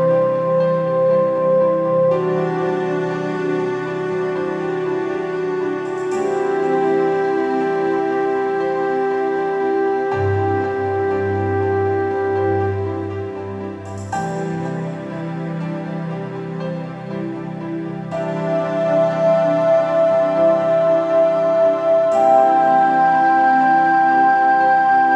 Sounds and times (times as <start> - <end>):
Music: 0.0 - 25.1.